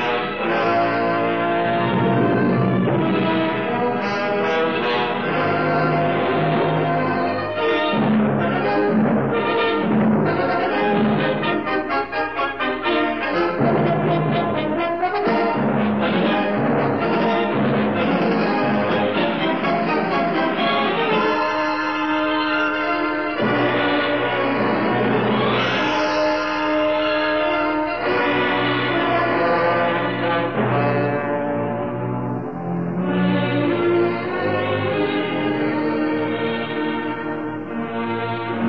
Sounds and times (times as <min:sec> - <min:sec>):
Jazz: 0:00.0 - 0:38.6.